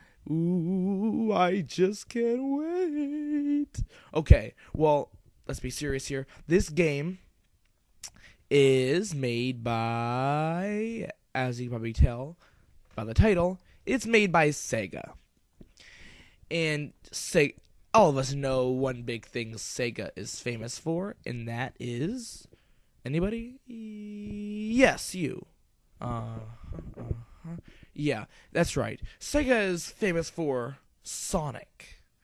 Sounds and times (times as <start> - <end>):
Speech: 1.0 - 7.2, 8.5 - 12.4, 13.0 - 15.2, 16.5 - 22.5, 23.1 - 32.0.